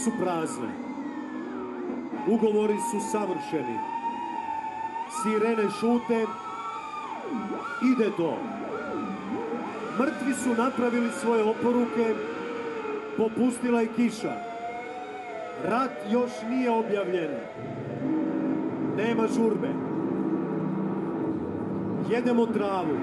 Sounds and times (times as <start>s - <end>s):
Speech: 0.0s - 0.8s, 2.2s - 3.9s, 5.1s - 6.4s, 7.4s - 8.5s, 10.0s - 12.2s, 13.2s - 14.4s, 15.6s - 17.5s, 19.0s - 19.8s, 22.0s - 23.0s.